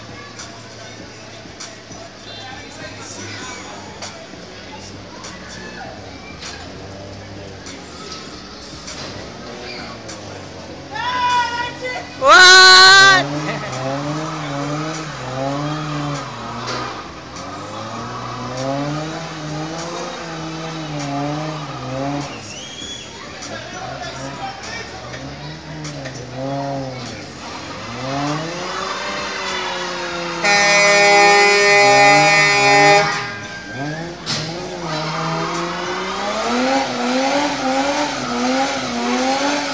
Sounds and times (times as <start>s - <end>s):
Car: 0.0s - 39.7s
Speech: 23.1s - 27.7s.